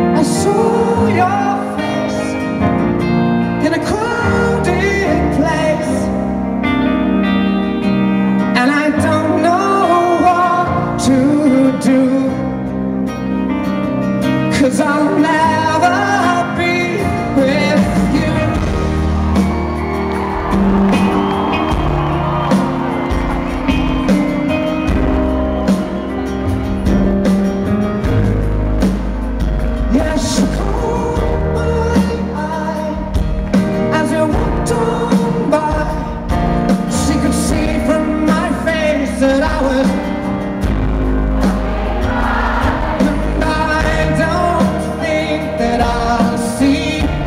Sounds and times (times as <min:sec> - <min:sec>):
Male singing: 0:00.0 - 0:02.4, 0:03.6 - 0:06.2, 0:08.6 - 0:12.5, 0:14.5 - 0:18.8, 0:29.9 - 0:33.2, 0:33.8 - 0:36.3, 0:36.9 - 0:40.1, 0:43.0 - 0:47.2
Music: 0:00.0 - 0:47.2.